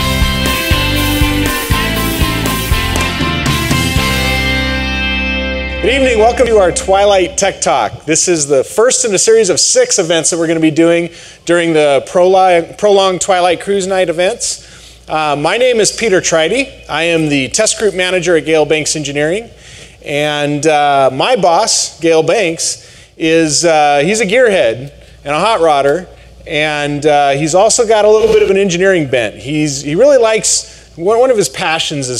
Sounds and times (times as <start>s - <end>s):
Speech: 5.8s - 19.5s, 20.1s - 32.1s.